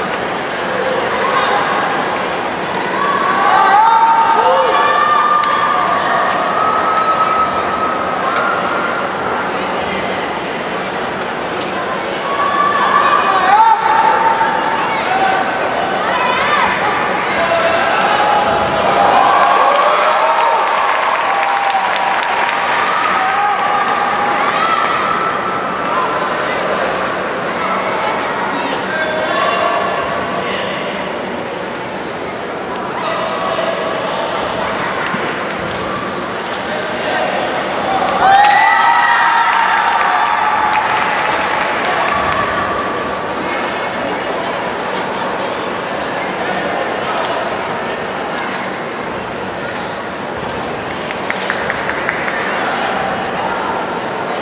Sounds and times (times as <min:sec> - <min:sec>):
Speech: 0:00.7 - 0:19.9.